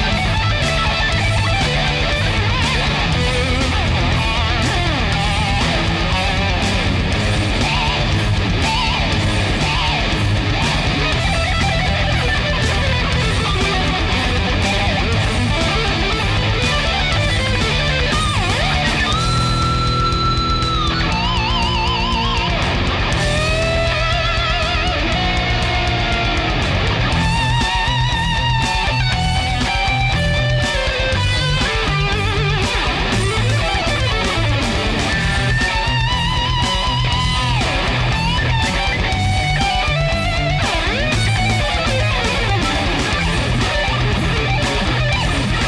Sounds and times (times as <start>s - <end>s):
Strum: 0.0s - 45.6s.